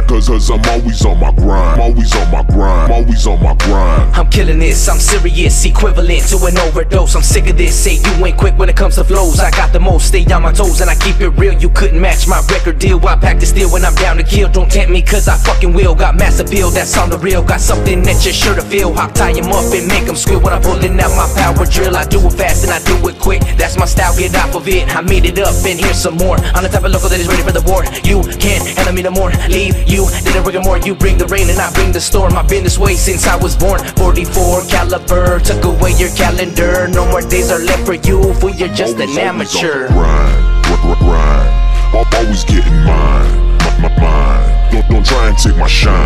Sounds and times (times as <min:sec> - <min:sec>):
Music: 0:00.0 - 0:46.0.